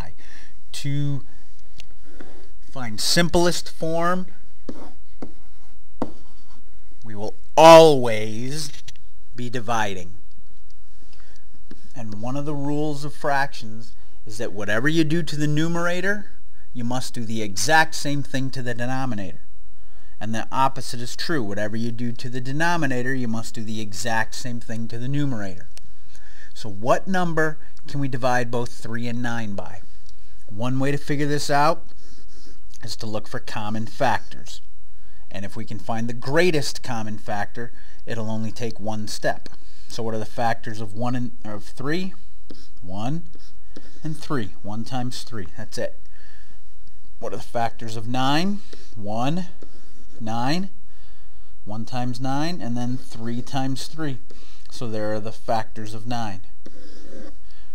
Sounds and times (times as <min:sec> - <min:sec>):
Speech: 0:00.0 - 0:01.3, 0:02.7 - 0:04.4, 0:07.0 - 0:10.2, 0:11.9 - 0:19.4, 0:20.2 - 0:25.7, 0:26.6 - 0:29.9, 0:30.5 - 0:31.9, 0:32.8 - 0:34.7, 0:35.3 - 0:42.2, 0:42.8 - 0:43.3, 0:44.0 - 0:46.0, 0:47.2 - 0:49.6, 0:50.2 - 0:50.7, 0:51.7 - 0:56.5.